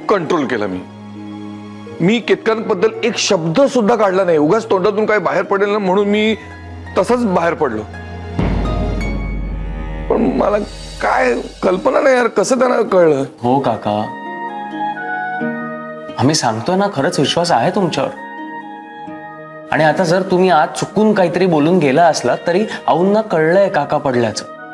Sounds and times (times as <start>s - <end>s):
Speech: 0.0s - 0.9s, 2.0s - 6.4s, 7.0s - 7.9s, 10.1s - 14.2s, 16.2s - 18.2s, 19.7s - 24.5s
Music: 0.0s - 24.7s.